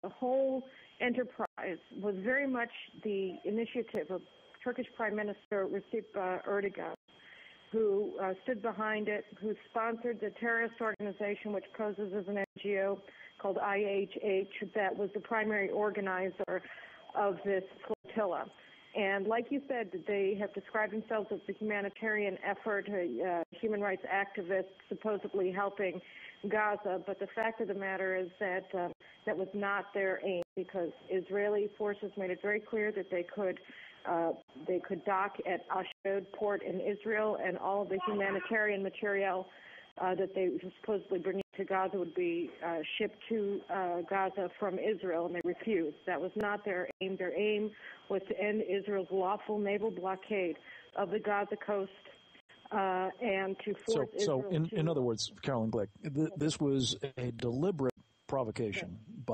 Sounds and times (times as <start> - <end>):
Speech: 0.0 - 7.0, 7.8 - 52.0, 52.7 - 59.3.